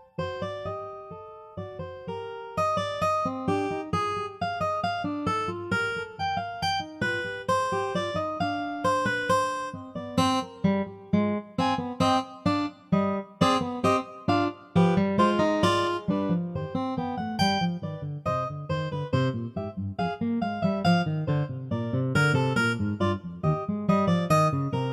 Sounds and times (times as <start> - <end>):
Music: 0.0 - 24.9.